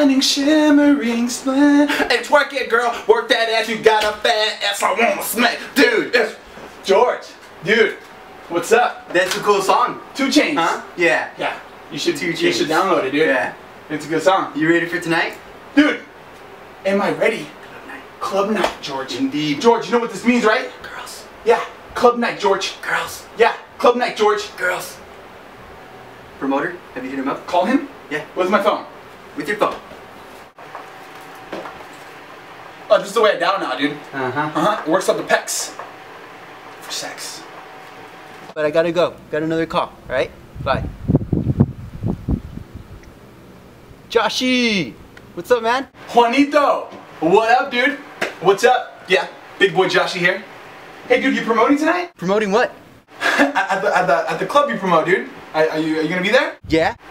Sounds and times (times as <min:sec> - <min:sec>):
Speech: 0:02.0 - 0:16.1, 0:16.8 - 0:25.0, 0:26.4 - 0:29.8, 0:32.9 - 0:35.8, 0:36.8 - 0:37.5, 0:38.6 - 0:40.9, 0:44.1 - 0:50.5, 0:51.1 - 0:52.8, 0:53.5 - 0:57.0.